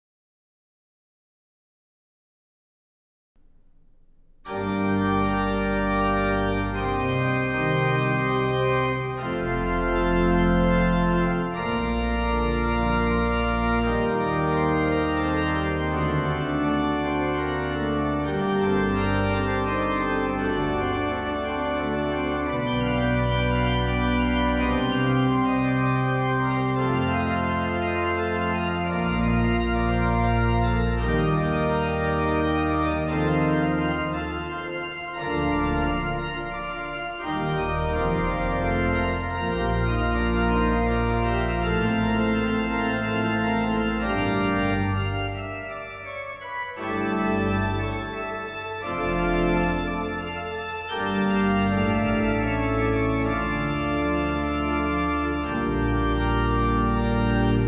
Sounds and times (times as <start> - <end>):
Organ: 4.4 - 57.6.